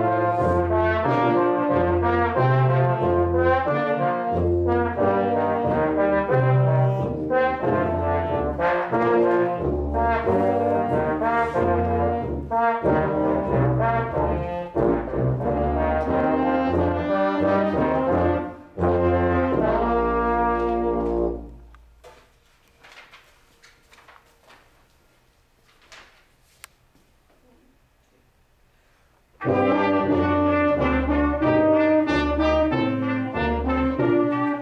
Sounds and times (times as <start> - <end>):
Brass instrument: 0.0 - 22.0, 29.3 - 34.6.